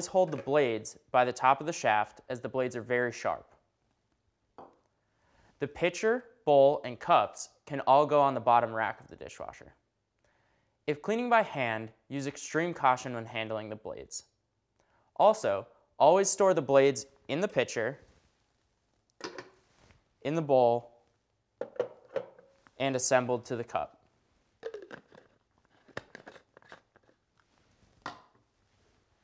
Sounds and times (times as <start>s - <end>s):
Speech: 0.0s - 3.6s, 5.6s - 9.8s, 10.9s - 14.4s, 15.2s - 18.0s, 20.2s - 21.0s, 22.8s - 24.0s.